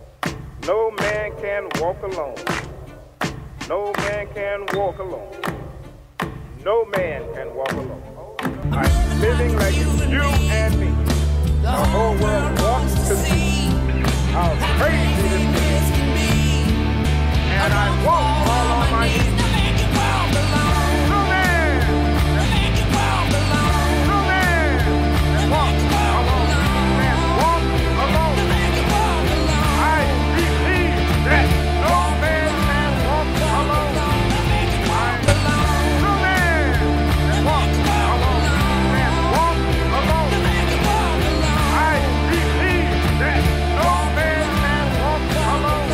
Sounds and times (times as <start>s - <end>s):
Music: 0.0s - 45.9s.